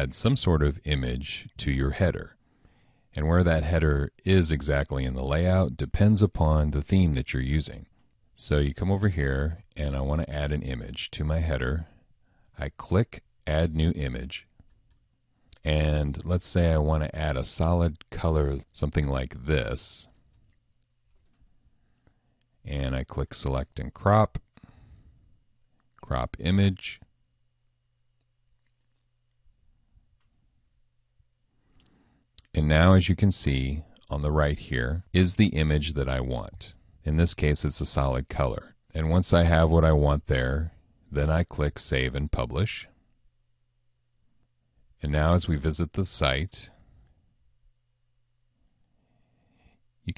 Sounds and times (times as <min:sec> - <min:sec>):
Speech: 0:00.0 - 0:02.4, 0:03.2 - 0:12.0, 0:12.6 - 0:14.5, 0:15.5 - 0:20.2, 0:22.6 - 0:24.5, 0:26.0 - 0:27.1, 0:32.4 - 0:43.0, 0:45.0 - 0:46.8
Inside, small room: 0:00.0 - 0:50.1.